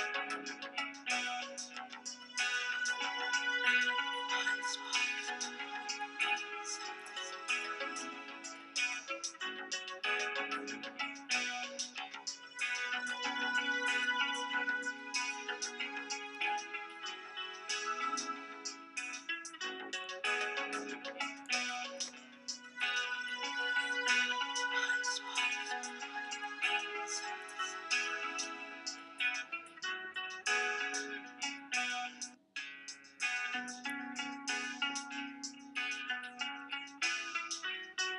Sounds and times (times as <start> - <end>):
Music: 0.0 - 38.1.